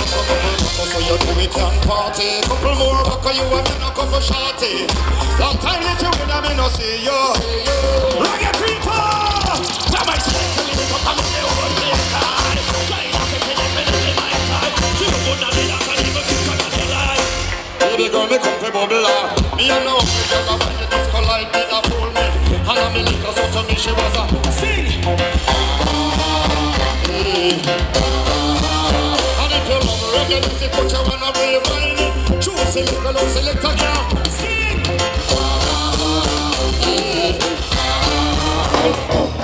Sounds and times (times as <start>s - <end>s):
Rhythm and blues: 0.0s - 39.4s.